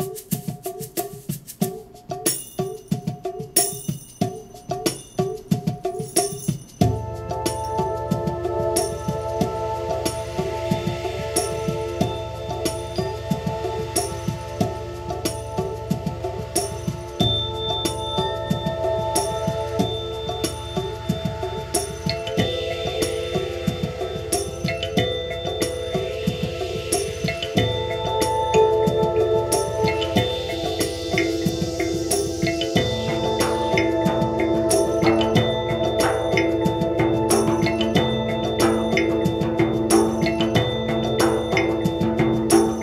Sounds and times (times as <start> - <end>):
Percussion: 0.0 - 42.8.